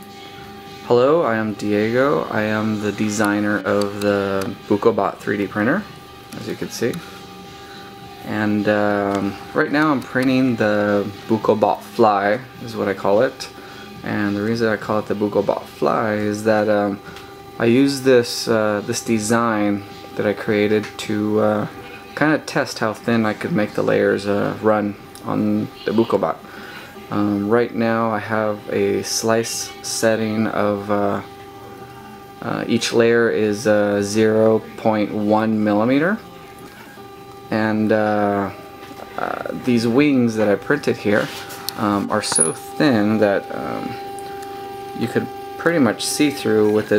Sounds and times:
Speech: 0.9s - 7.0s, 8.2s - 17.0s, 17.6s - 26.4s, 27.0s - 31.3s, 32.4s - 36.3s, 37.5s - 44.0s, 45.0s - 46.9s.

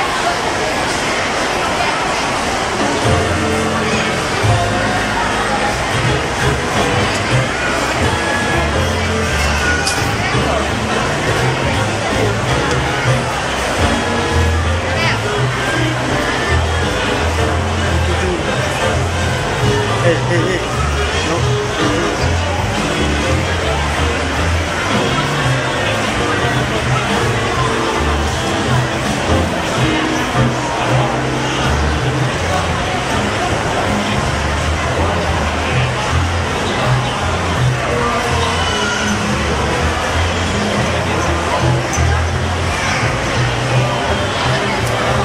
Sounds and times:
Speech: 0.0s - 45.2s.

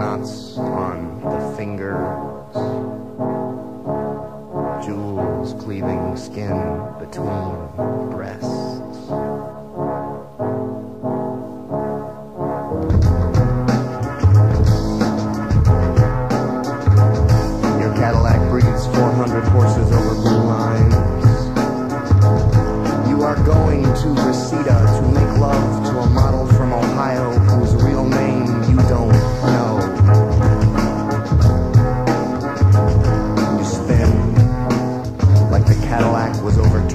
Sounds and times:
Music: 0.0s - 36.9s.

